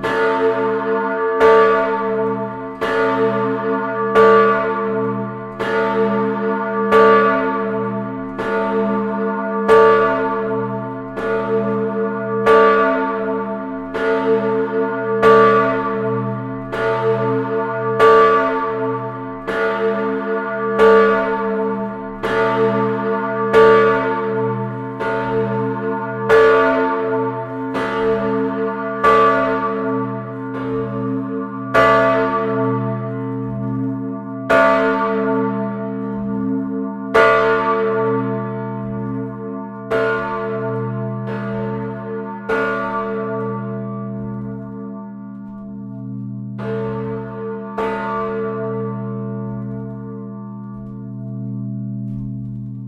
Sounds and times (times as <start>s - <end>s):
Church bell: 0.0s - 52.8s.